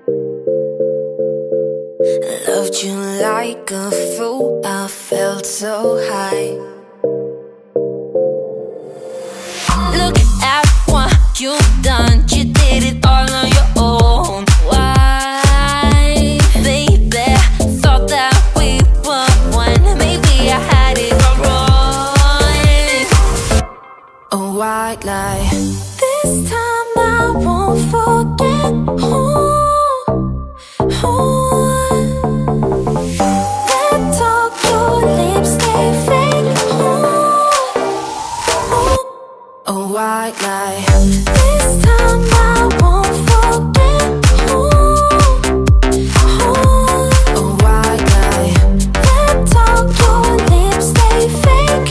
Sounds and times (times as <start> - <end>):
Music: 0.0 - 39.1, 40.4 - 51.9.